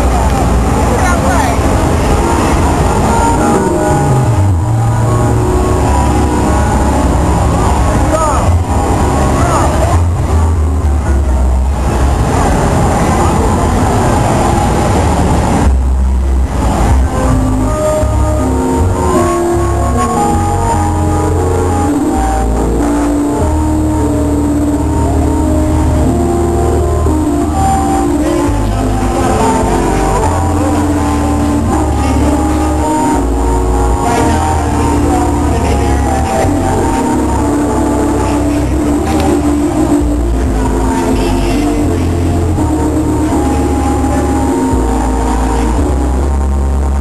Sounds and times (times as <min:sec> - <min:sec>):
Music: 0:00.0 - 0:47.0.